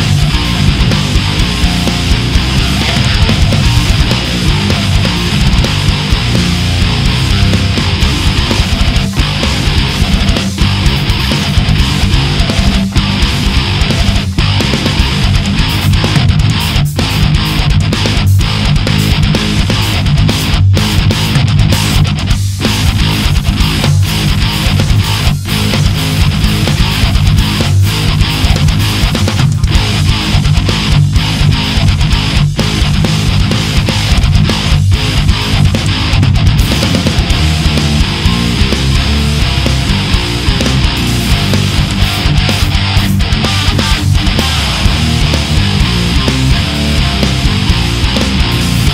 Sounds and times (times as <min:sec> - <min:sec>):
Music: 0:00.0 - 0:48.9.